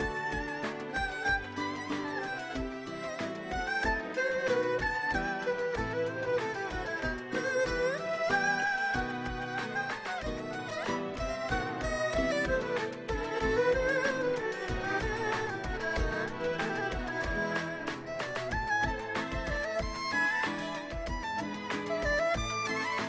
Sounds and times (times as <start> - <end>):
Violin, fiddle: 0.0 - 23.0.